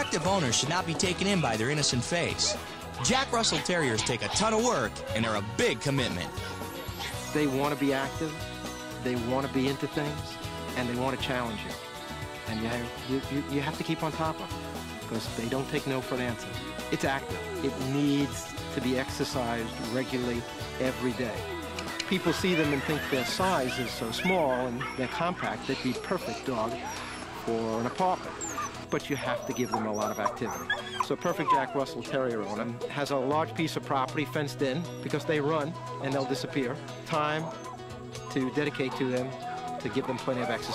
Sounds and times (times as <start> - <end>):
Dog: 22.5 - 32.8, 37.4 - 40.7.